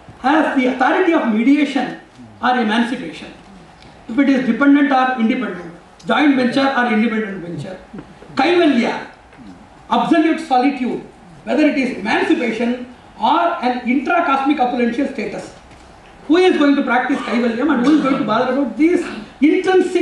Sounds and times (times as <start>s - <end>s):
Narration, monologue: 0.0s - 20.0s
Male speech, man speaking: 0.2s - 3.4s, 4.1s - 9.1s, 9.9s - 15.6s, 16.3s - 20.0s.